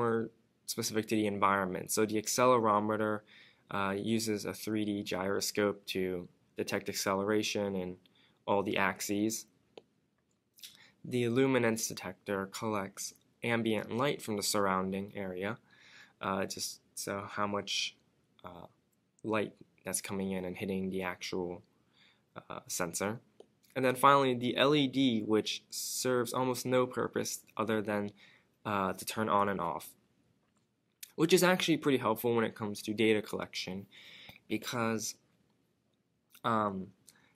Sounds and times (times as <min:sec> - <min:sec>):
Speech: 0:00.0 - 0:09.5, 0:10.6 - 0:15.6, 0:16.2 - 0:21.7, 0:22.4 - 0:30.0, 0:31.0 - 0:33.9, 0:34.5 - 0:35.2, 0:36.4 - 0:37.0
Inside, small room: 0:00.0 - 0:37.3.